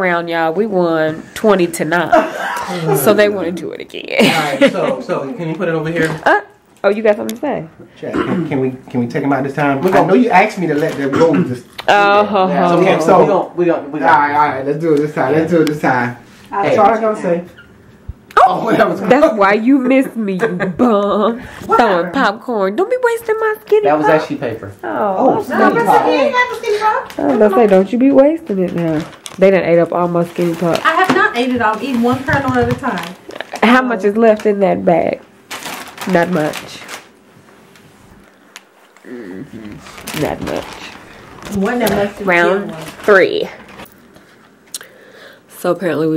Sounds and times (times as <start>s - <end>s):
Laughter: 2.1s - 2.9s, 4.2s - 5.2s, 20.4s - 21.3s.